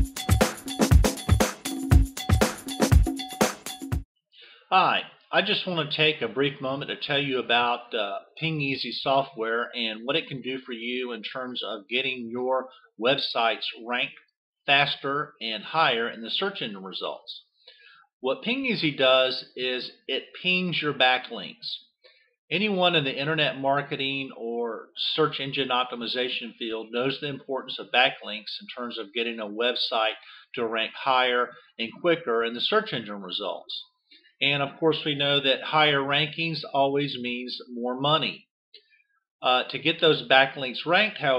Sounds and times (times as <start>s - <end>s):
Speech: 4.7s - 17.5s, 18.2s - 21.9s, 22.5s - 38.4s, 39.4s - 41.3s.